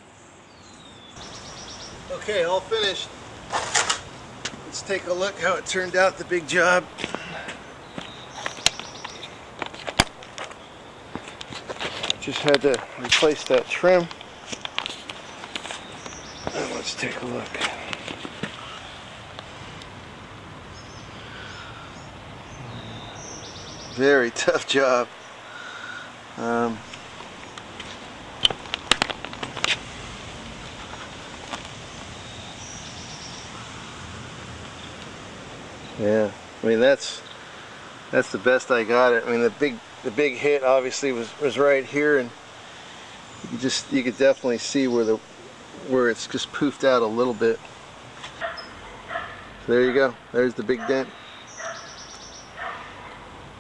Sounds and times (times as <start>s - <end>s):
Speech: 2.1s - 3.1s, 4.7s - 6.9s, 12.2s - 14.2s, 16.5s - 17.8s, 24.0s - 25.1s, 26.4s - 26.8s, 36.0s - 37.2s, 38.1s - 42.4s, 43.5s - 45.2s, 45.8s - 47.7s, 49.7s - 51.2s.